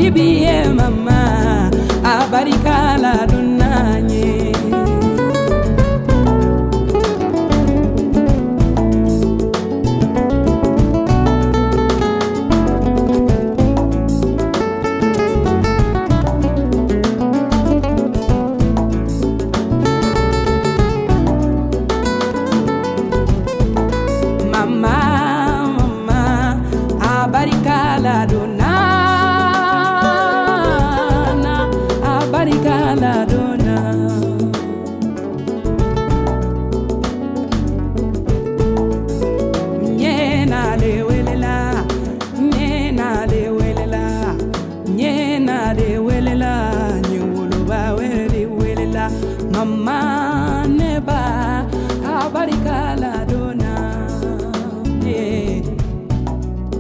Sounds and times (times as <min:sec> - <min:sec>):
Music: 0:00.0 - 0:56.8.